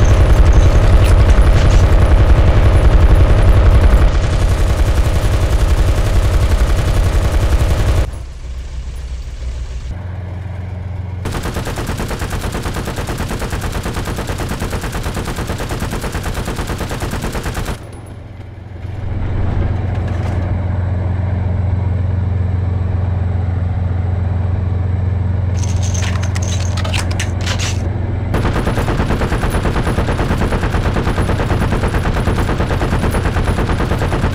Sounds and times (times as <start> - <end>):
Machine gun: 0.0 - 8.1, 11.2 - 17.9, 28.4 - 34.3.